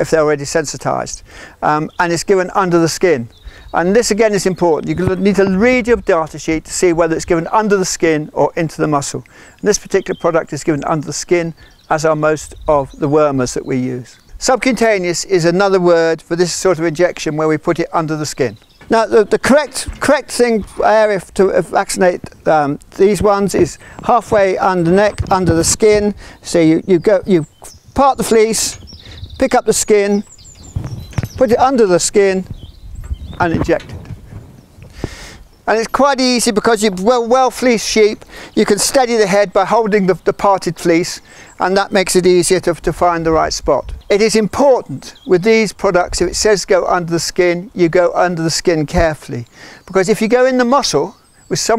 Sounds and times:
Speech: 0:00.0 - 0:30.3, 0:31.4 - 0:32.5, 0:33.4 - 0:34.0, 0:35.7 - 0:51.7.

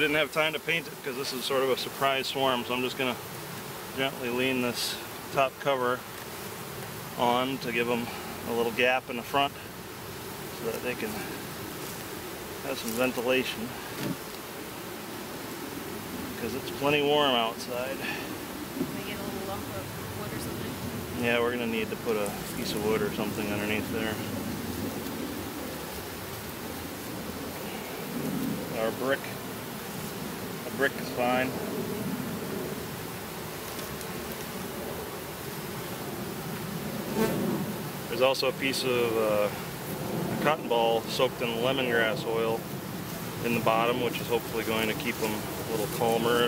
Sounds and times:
Bee, wasp, etc.: 0:00.0 - 0:46.4
Fly, housefly: 0:00.0 - 0:46.4.

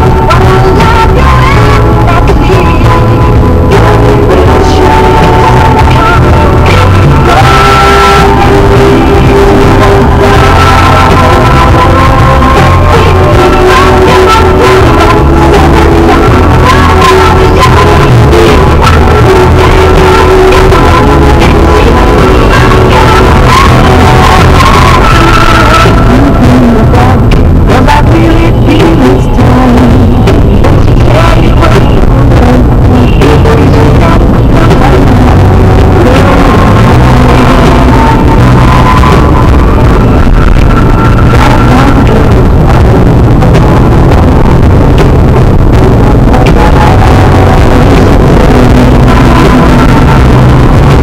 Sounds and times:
Music: 0:00.0 - 0:51.0.

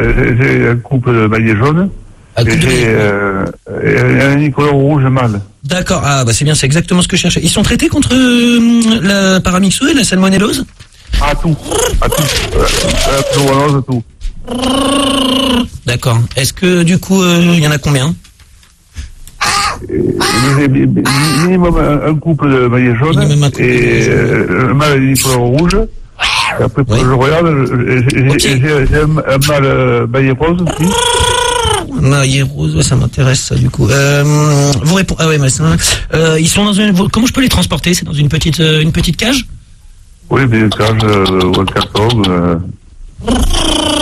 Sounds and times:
Speech: 0:00.0 - 0:14.1, 0:19.9 - 0:25.9, 0:26.6 - 0:31.0, 0:40.3 - 0:42.8.

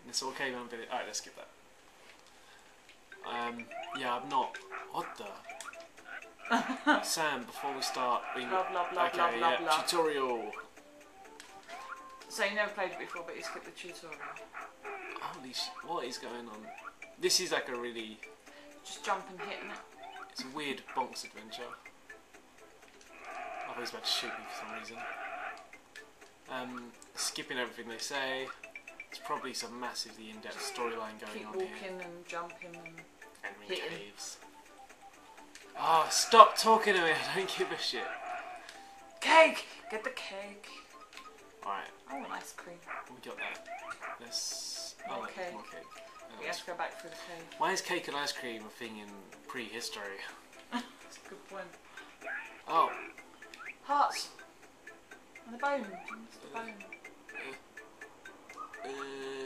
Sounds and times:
Music: 0:00.0 - 0:59.4.

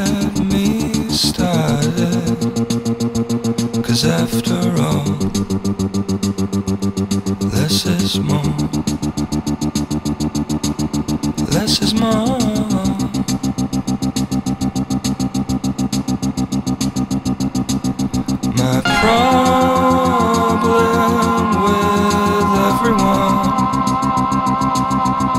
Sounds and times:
Music: 0:00.0 - 0:25.3
Sound effect: 0:18.8 - 0:25.3.

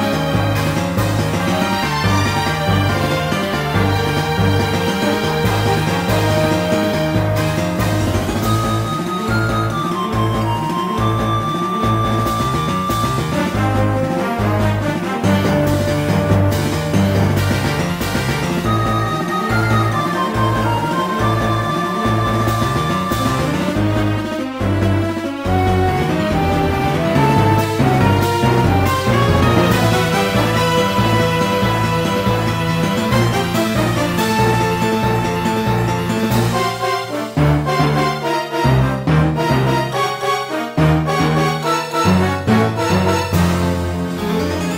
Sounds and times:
Video game music: 0:00.0 - 0:44.7.

